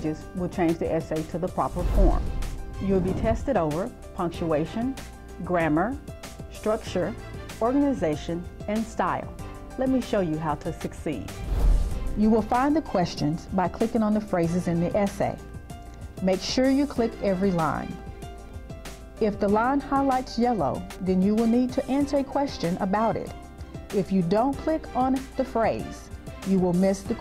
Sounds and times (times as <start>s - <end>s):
Speech: 0.0s - 2.2s, 2.8s - 11.3s, 12.2s - 15.4s, 16.2s - 18.0s, 19.2s - 23.3s, 24.0s - 27.2s
Music: 0.0s - 27.2s.